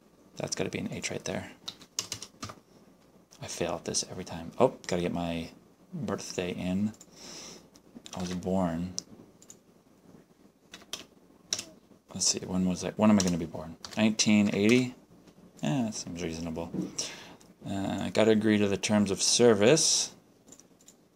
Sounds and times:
Speech: 0.4 - 1.6, 3.4 - 7.0, 8.1 - 9.0, 12.1 - 15.0, 15.6 - 16.9, 17.6 - 20.2.

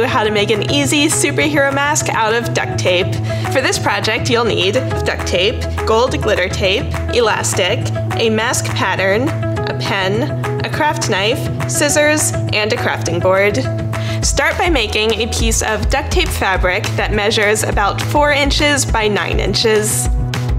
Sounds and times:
Speech: 0.0 - 20.1
Music: 0.0 - 20.5.

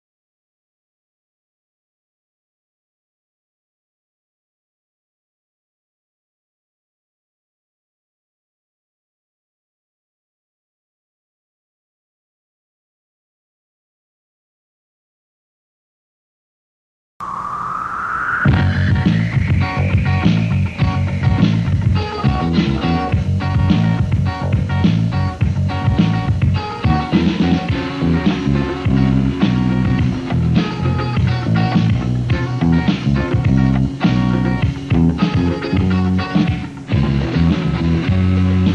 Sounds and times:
Music: 17.2 - 38.7.

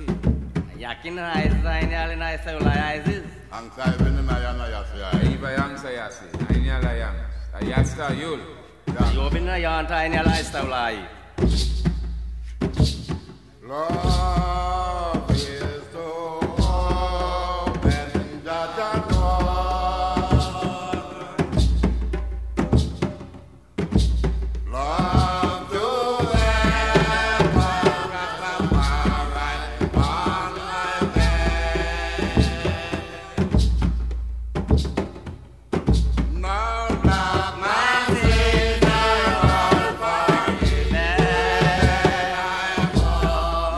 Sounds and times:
Music: 0.0 - 43.7.

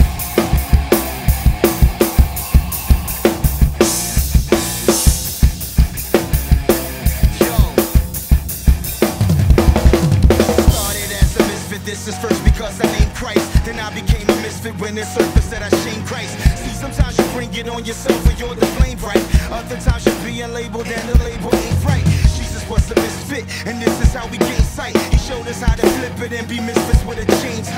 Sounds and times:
Dance music: 0.0 - 27.7.

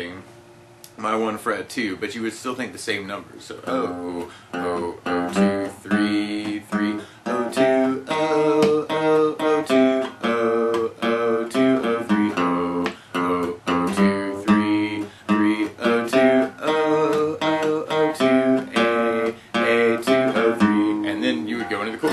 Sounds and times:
Acoustic guitar: 3.5 - 22.1
Singing: 3.7 - 22.1.

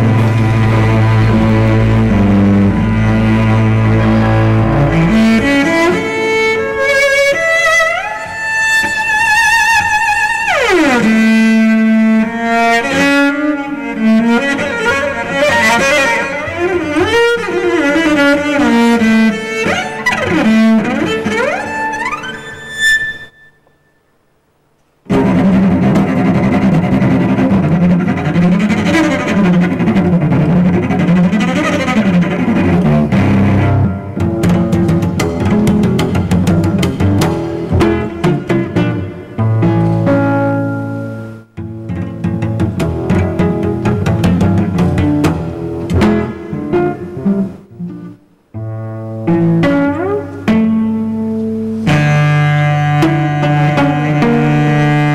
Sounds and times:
Cello: 0.0 - 23.9, 25.1 - 55.1.

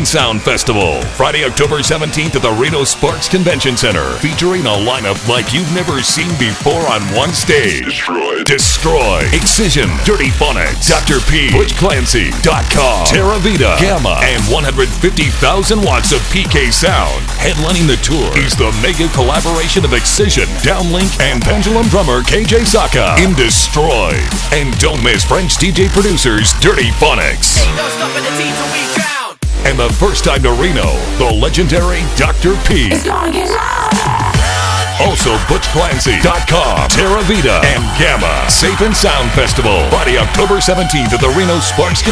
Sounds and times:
Speech: 0.0 - 34.2, 35.0 - 42.1
Music: 0.0 - 42.1.

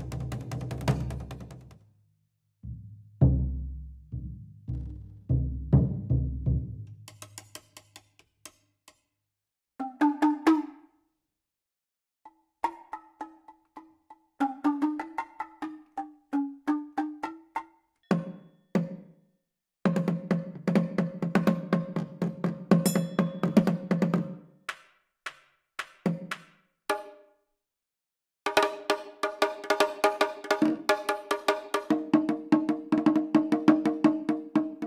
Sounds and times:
Wood block: 6.9 - 9.2, 12.3 - 19.0, 21.6 - 27.2.

